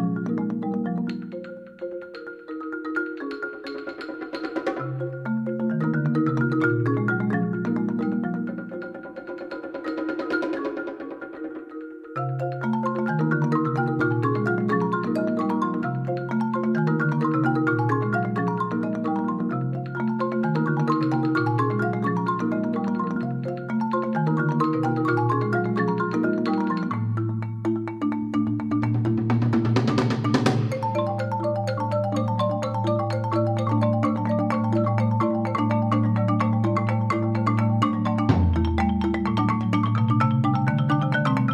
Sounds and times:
Marimba, xylophone: 0.0 - 41.5.

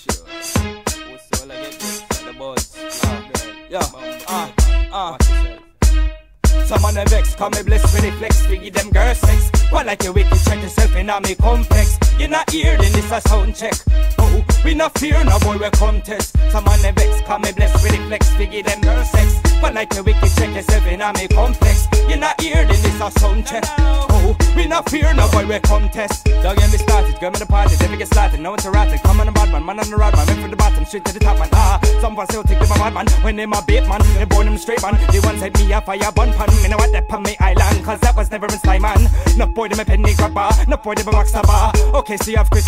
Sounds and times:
Music: 0.0 - 42.6.

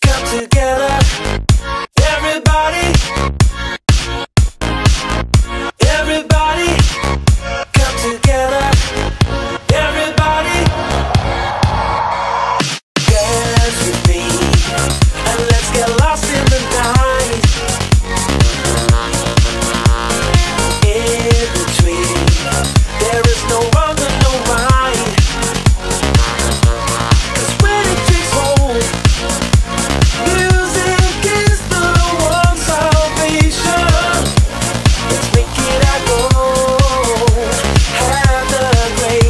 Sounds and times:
Rhythm and blues: 0.0 - 39.3
Soundtrack music: 6.7 - 39.3.

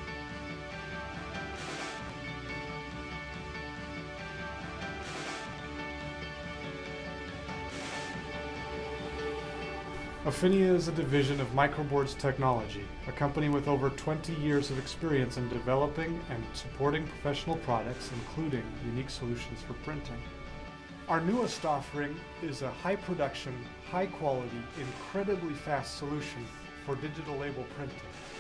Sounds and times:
Music: 0.0 - 28.4
Speech: 10.2 - 20.3, 21.1 - 28.0.

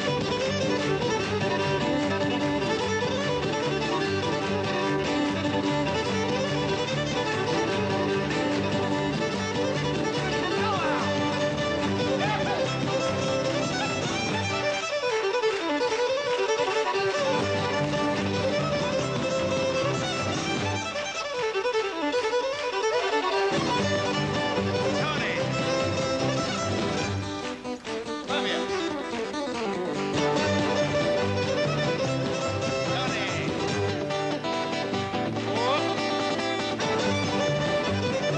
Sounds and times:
Music: 0.0 - 38.3.

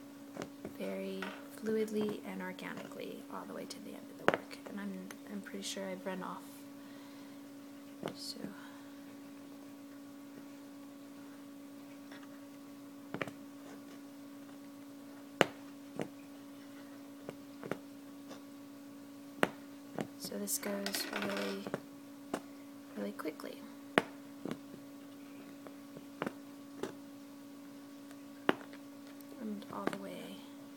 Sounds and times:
Inside, small room: 0.0 - 30.7
Speech: 0.8 - 6.6, 8.1 - 8.7, 20.2 - 21.7, 23.0 - 23.7, 29.3 - 30.6.

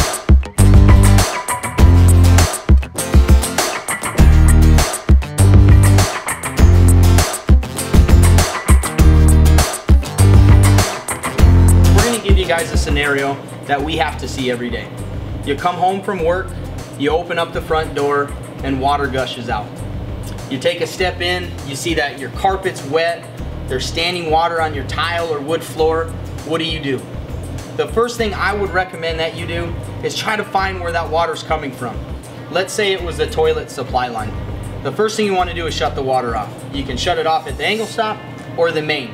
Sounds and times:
Music: 0.0 - 39.1
Speech: 12.0 - 14.9, 15.5 - 19.7, 20.5 - 27.1, 27.8 - 39.1.

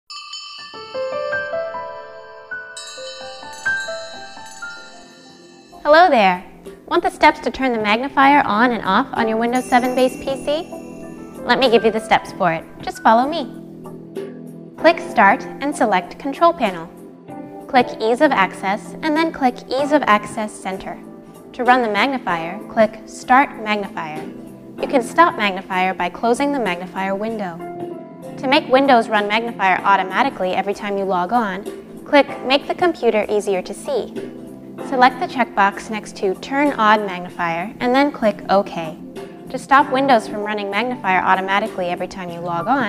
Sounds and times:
Marimba, xylophone: 0.1 - 6.2, 9.4 - 13.3
Glockenspiel: 0.1 - 6.5, 9.2 - 13.6.

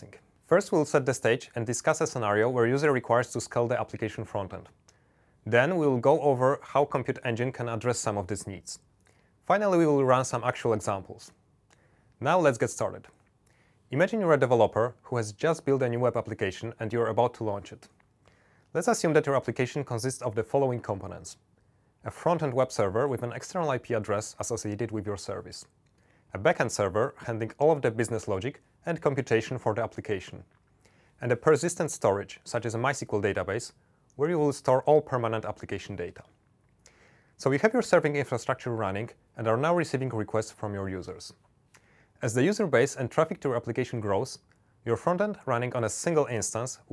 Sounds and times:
Speech: 0.0 - 4.8, 5.4 - 11.4, 12.2 - 13.2, 13.9 - 18.0, 18.7 - 30.5, 31.2 - 36.4, 37.4 - 41.4, 42.2 - 46.9.

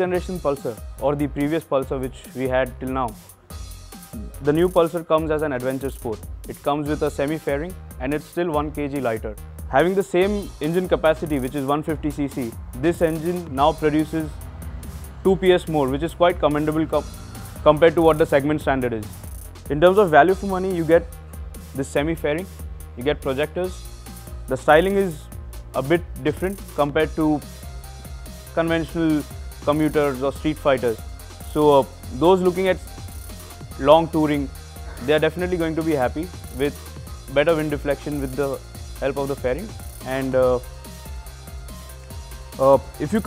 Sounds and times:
Speech: 0.0 - 3.2, 4.2 - 14.3, 15.3 - 17.0, 17.7 - 19.1, 19.7 - 21.1, 21.8 - 23.8, 24.5 - 25.2, 25.8 - 27.4, 28.6 - 32.8, 33.8 - 40.6, 42.6 - 43.2
Music: 0.0 - 43.2.

